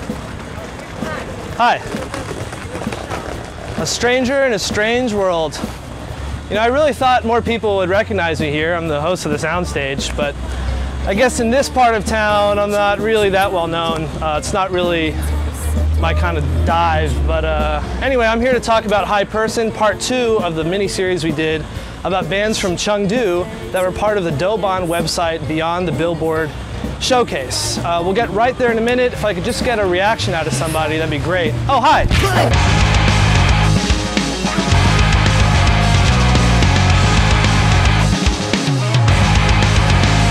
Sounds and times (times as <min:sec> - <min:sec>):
Music: 0:00.0 - 0:40.3
Speech: 0:03.8 - 0:05.7, 0:06.5 - 0:10.4, 0:11.1 - 0:32.6.